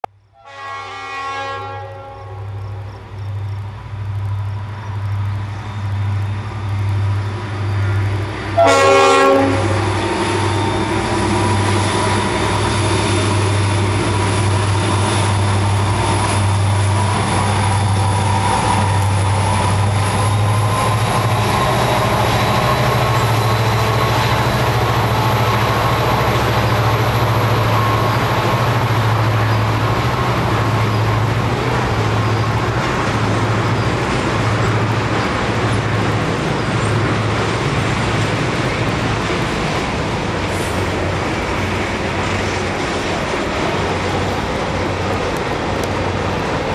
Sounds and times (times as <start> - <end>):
Outside, rural or natural: 0.0 - 46.7
Railroad car, train wagon: 0.1 - 46.7
Train horn: 0.4 - 2.8, 8.5 - 10.0.